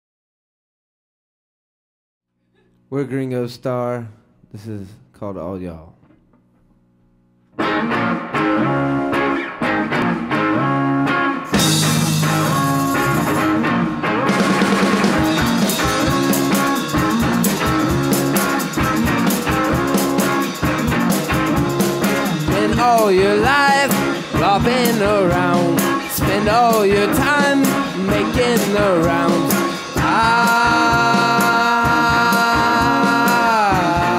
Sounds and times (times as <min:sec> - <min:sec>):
Speech: 0:02.9 - 0:06.0
Electric guitar: 0:07.5 - 0:34.1.